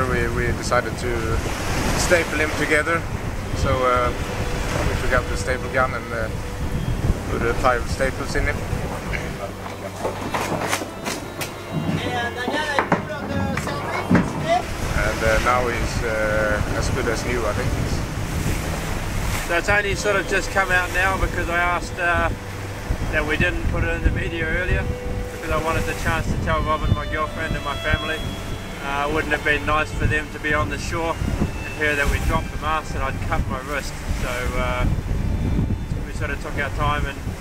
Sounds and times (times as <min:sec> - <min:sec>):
Wind noise (microphone): 0:00.0 - 0:11.0, 0:13.4 - 0:37.4
Boat, Water vehicle: 0:00.0 - 0:37.4.